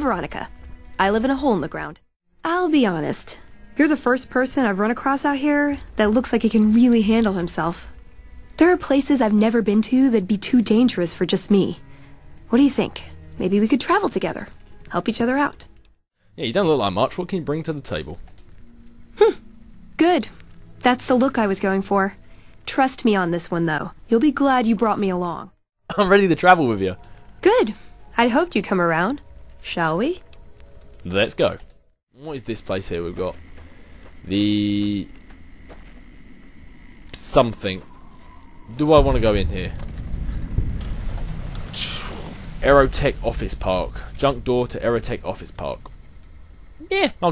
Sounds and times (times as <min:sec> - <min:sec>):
Speech synthesizer: 0:00.0 - 0:07.8, 0:12.5 - 0:15.7, 0:20.0 - 0:30.2.